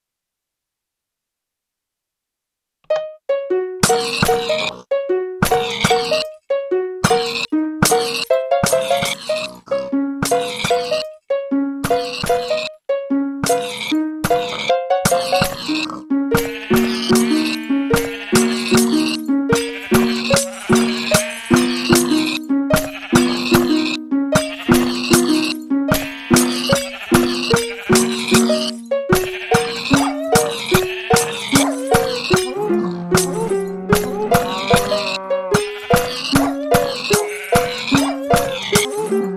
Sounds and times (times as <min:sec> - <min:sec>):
Music: 0:02.9 - 0:39.3
Animal: 0:03.8 - 0:06.4, 0:07.0 - 0:11.2, 0:11.9 - 0:12.8, 0:13.4 - 0:39.3.